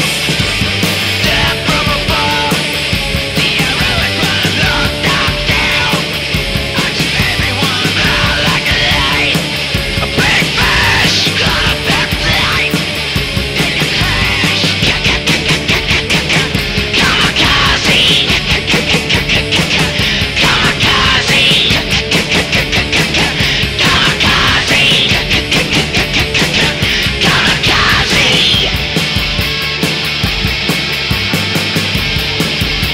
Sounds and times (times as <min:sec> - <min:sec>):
Music: 0:00.0 - 0:32.9.